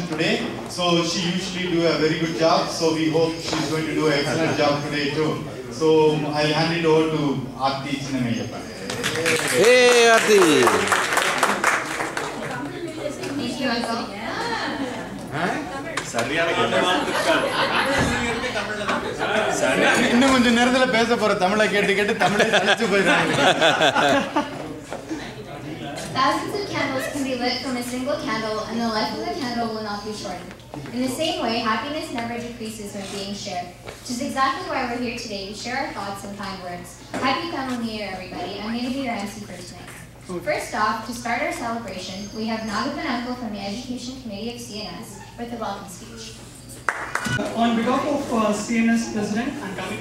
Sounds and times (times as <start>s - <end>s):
Female speech, woman speaking: 12.4s - 15.2s, 26.1s - 46.5s.